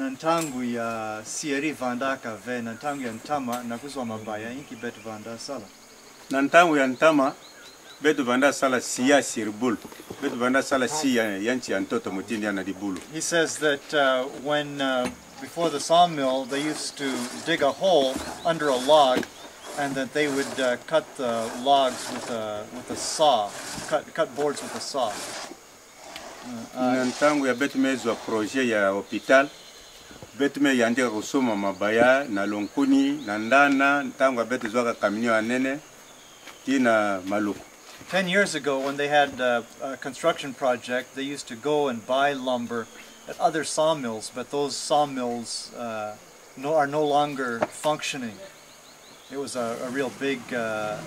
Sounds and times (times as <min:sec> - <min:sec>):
Speech: 0:00.0 - 0:05.7, 0:08.0 - 0:19.2, 0:19.8 - 0:25.2, 0:30.4 - 0:35.8, 0:36.7 - 0:48.6, 0:49.3 - 0:51.0.